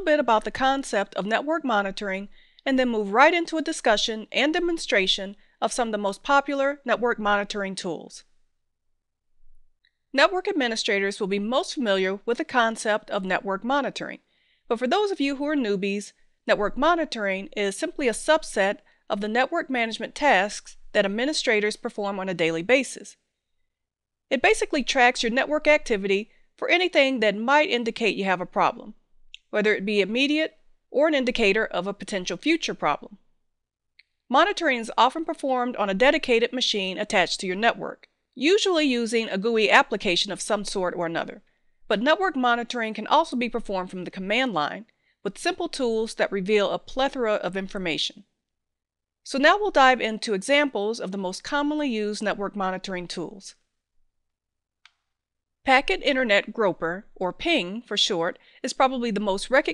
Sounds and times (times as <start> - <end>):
Speech: 0.0 - 8.3, 10.2 - 23.2, 24.3 - 33.2, 34.3 - 48.2, 49.3 - 53.6, 55.7 - 59.7.